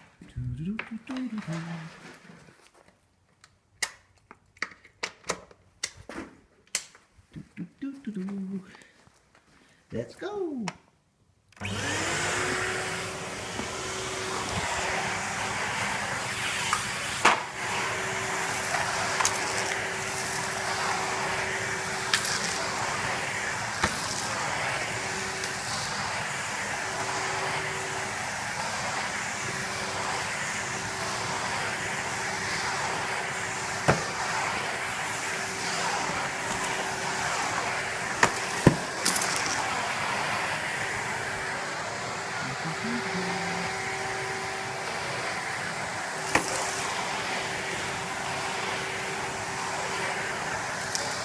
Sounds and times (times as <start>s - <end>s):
Speech: 0.2s - 2.0s, 7.4s - 8.7s, 9.9s - 10.8s, 42.4s - 43.7s
Vacuum cleaner: 0.8s - 2.5s, 11.6s - 51.2s.